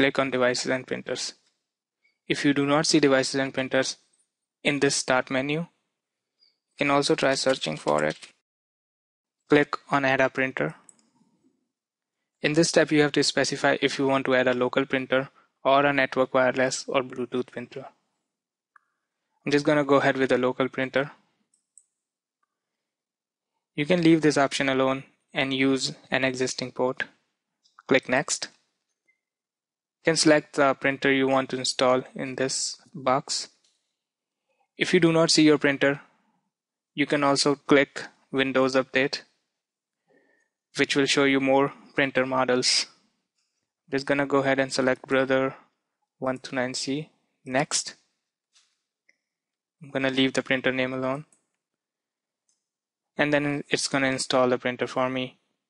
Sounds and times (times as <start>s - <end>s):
Speech: 0.0s - 1.4s, 2.3s - 4.0s, 4.7s - 5.8s, 6.8s - 8.4s, 9.5s - 10.9s, 12.4s - 18.0s, 19.5s - 21.2s, 23.8s - 27.2s, 27.8s - 28.6s, 30.1s - 33.6s, 34.8s - 36.1s, 37.0s - 39.3s, 40.8s - 43.0s, 43.9s - 48.0s, 49.8s - 51.3s, 53.2s - 55.4s.